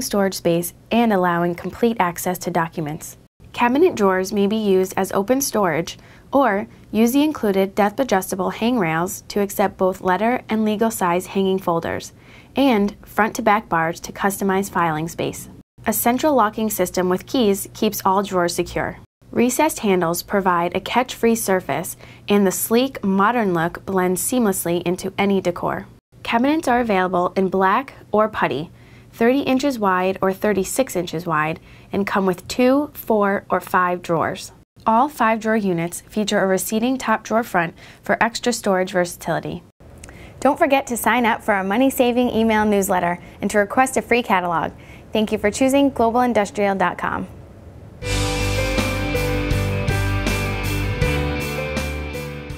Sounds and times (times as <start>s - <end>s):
Speech: 0.0s - 39.7s, 40.4s - 47.4s.